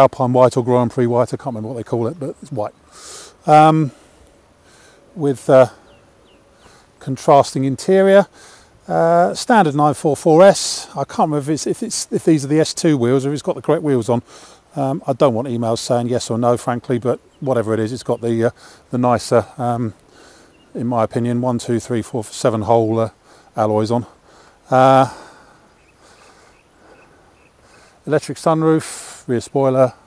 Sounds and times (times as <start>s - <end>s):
Speech: 0.0s - 2.8s, 3.4s - 4.0s, 5.2s - 5.8s, 7.0s - 8.3s, 8.9s - 20.0s, 20.7s - 25.2s, 28.0s - 30.0s.